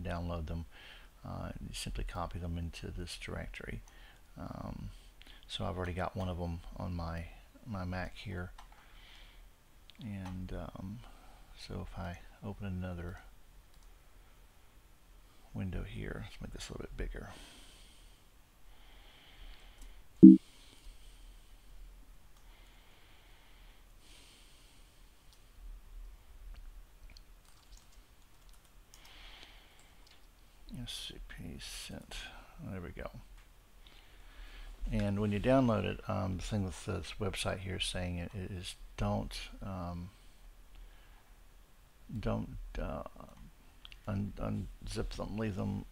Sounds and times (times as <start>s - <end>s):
Speech: 0.0s - 3.8s, 4.4s - 8.6s, 10.0s - 13.3s, 15.5s - 17.4s, 30.7s - 33.3s, 34.8s - 40.2s, 42.1s - 45.9s.